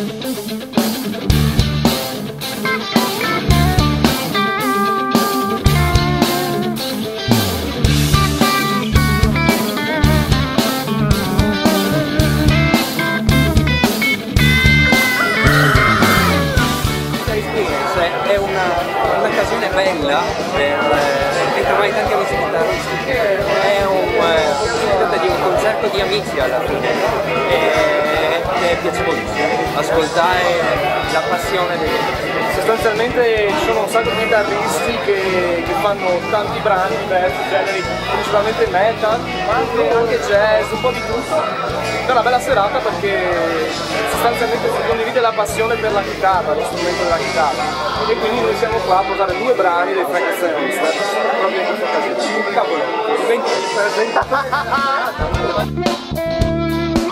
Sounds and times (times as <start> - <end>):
Speech: 17.1 - 56.0.